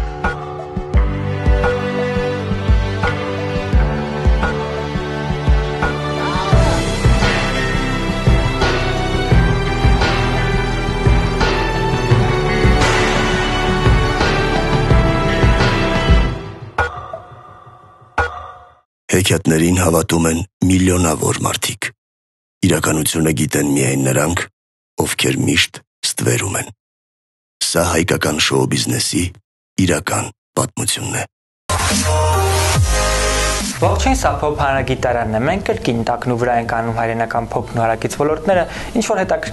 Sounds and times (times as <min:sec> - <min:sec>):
Music: 0:00.0 - 0:17.0, 0:31.7 - 0:36.0
Speech: 0:19.1 - 0:22.0, 0:22.6 - 0:26.8, 0:27.6 - 0:31.3, 0:33.8 - 0:39.5.